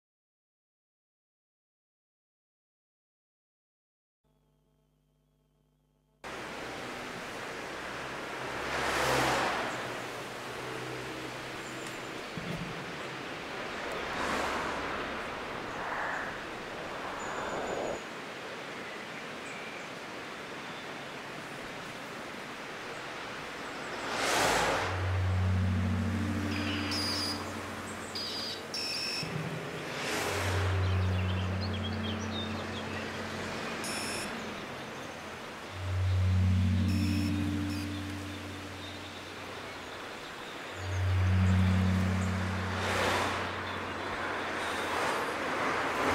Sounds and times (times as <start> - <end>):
Vehicle: 6.2 - 46.1.